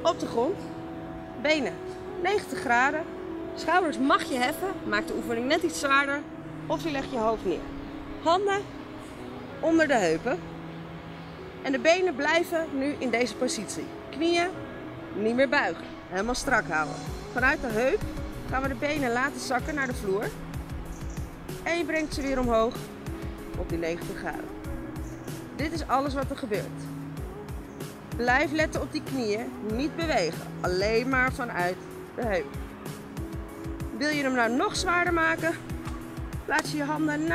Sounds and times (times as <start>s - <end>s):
Music: 0.0s - 37.3s.